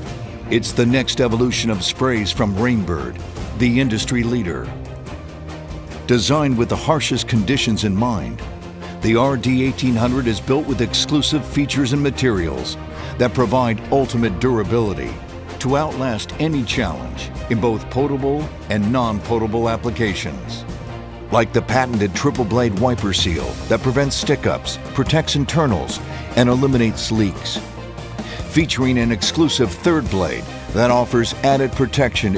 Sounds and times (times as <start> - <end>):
Music: 0.0 - 32.3
Speech: 0.5 - 4.8, 6.1 - 8.4, 9.0 - 20.6, 21.3 - 27.6, 28.5 - 32.3.